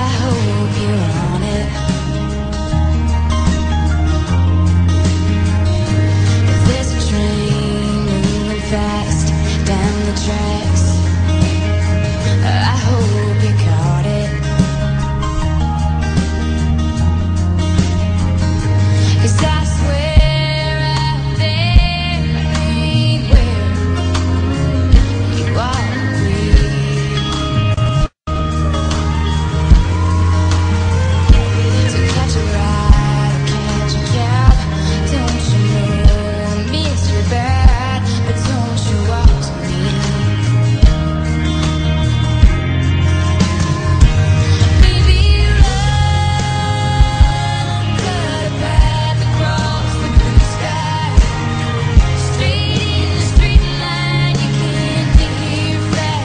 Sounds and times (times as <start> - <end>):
Music: 0.0 - 56.2.